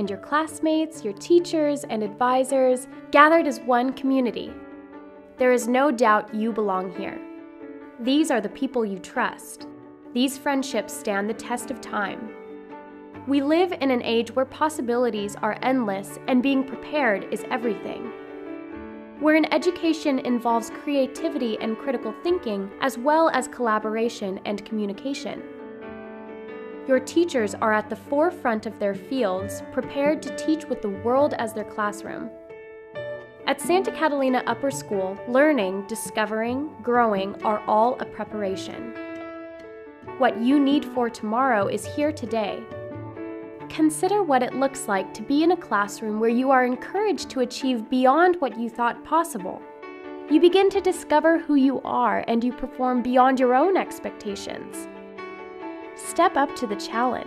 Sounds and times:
Speech: 0.0 - 4.6, 5.4 - 7.2, 8.0 - 9.6, 10.2 - 12.3, 13.3 - 18.1, 19.2 - 25.4, 26.9 - 32.3, 33.5 - 38.9, 40.2 - 42.6, 43.7 - 49.6, 50.3 - 54.9, 56.0 - 57.2
Music: 0.0 - 57.2.

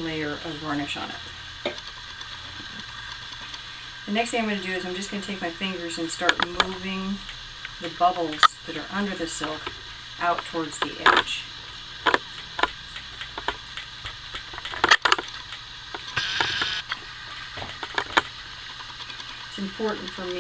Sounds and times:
Speech: 0.0 - 1.3, 4.1 - 7.2, 7.8 - 11.5, 19.6 - 20.4.

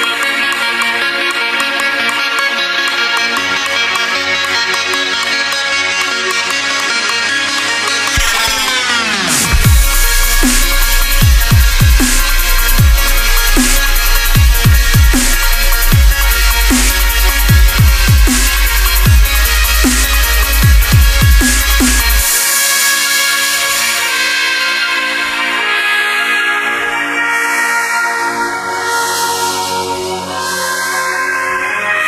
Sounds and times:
Dubstep: 8.0 - 32.0.

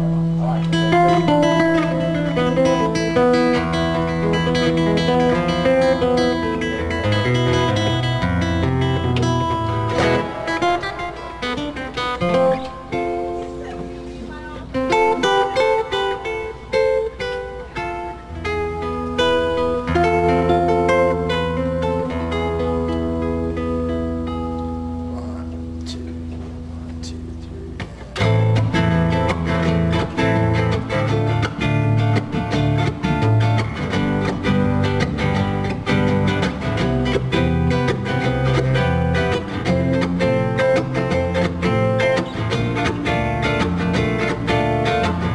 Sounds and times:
Speech: 0.0 - 0.8, 13.4 - 15.4, 25.1 - 26.2, 26.8 - 28.3
Acoustic guitar: 0.0 - 45.3
Jazz: 0.0 - 45.3
Strum: 0.0 - 45.3.

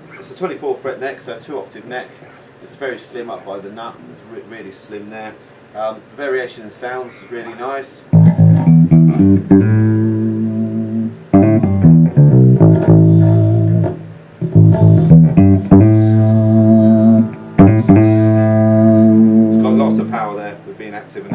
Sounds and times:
Bass guitar: 8.1 - 20.5.

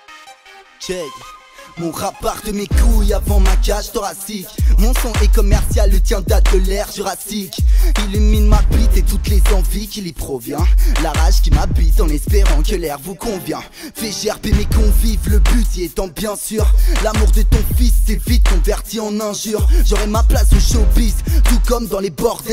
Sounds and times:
Soundtrack music: 0.0 - 3.8, 8.0 - 9.9.

